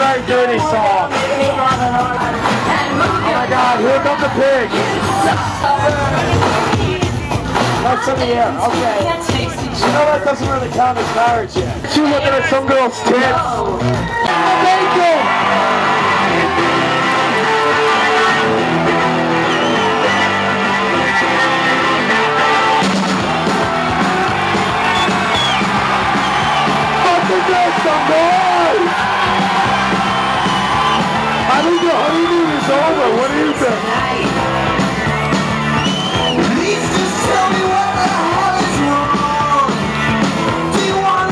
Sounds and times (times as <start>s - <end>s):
Music: 0.0s - 41.3s.